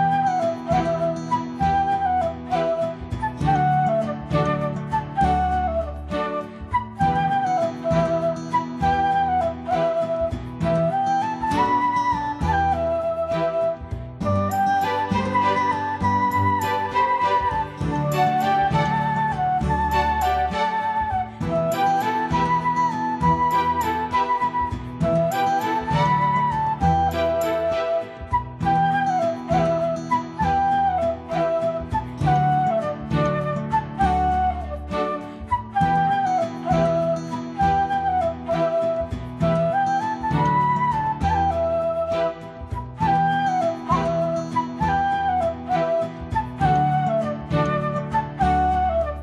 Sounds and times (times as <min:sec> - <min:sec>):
Flute: 0:00.0 - 0:49.2.